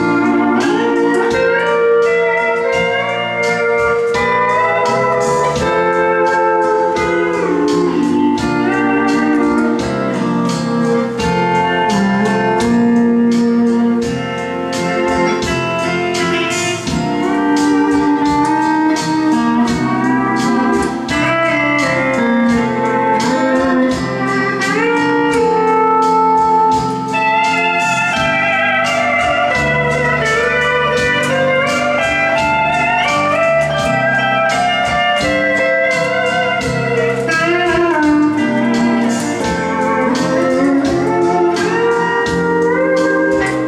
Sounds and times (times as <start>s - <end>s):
Steel guitar, slide guitar: 0.0s - 43.6s.